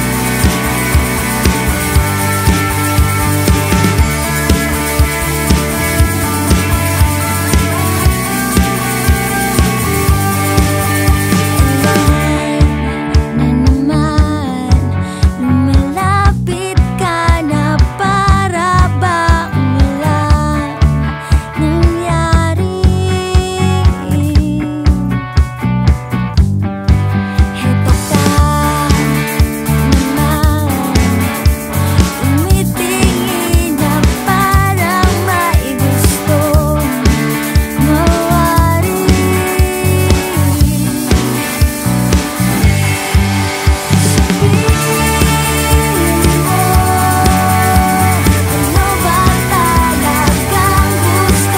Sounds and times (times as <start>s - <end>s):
Soundtrack music: 0.0s - 13.6s, 36.9s - 51.5s.